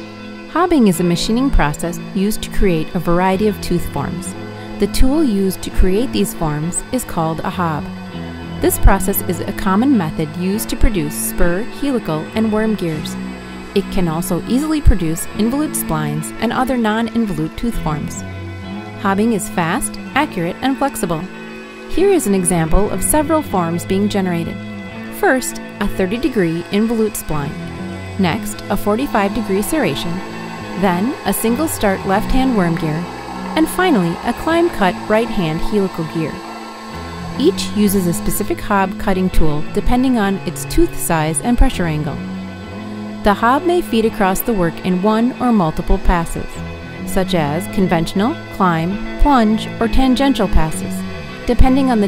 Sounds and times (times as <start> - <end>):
Music: 0.0 - 52.0
Speech: 0.5 - 7.9, 8.6 - 13.2, 13.8 - 18.2, 19.0 - 21.3, 21.9 - 27.6, 28.2 - 30.2, 30.8 - 33.0, 33.6 - 36.4, 37.4 - 42.2, 43.3 - 52.0.